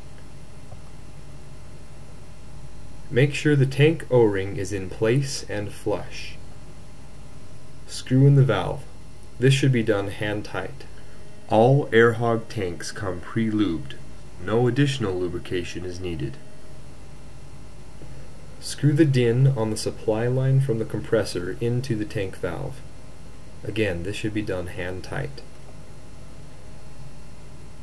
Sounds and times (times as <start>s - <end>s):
Speech: 3.1s - 6.4s, 7.9s - 16.4s, 18.6s - 22.9s, 23.6s - 25.6s.